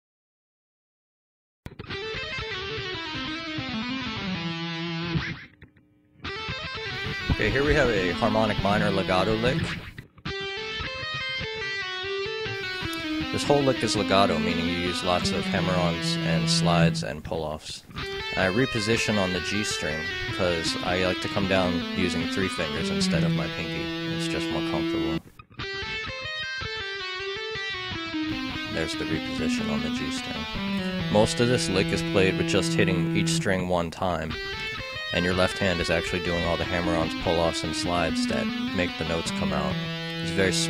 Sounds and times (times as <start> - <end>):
Music: 1.7 - 5.6, 6.2 - 17.1, 18.0 - 33.6, 34.3 - 40.7
Speech: 7.3 - 9.7, 13.3 - 25.2, 28.7 - 30.5, 31.1 - 34.4, 35.2 - 40.7.